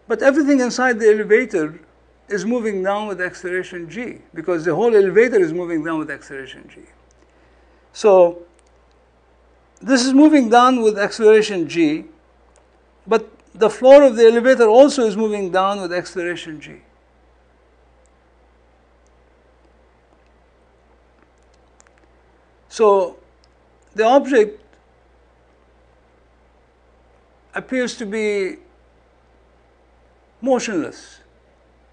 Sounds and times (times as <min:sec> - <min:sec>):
Narration, monologue: 0:00.0 - 0:31.9.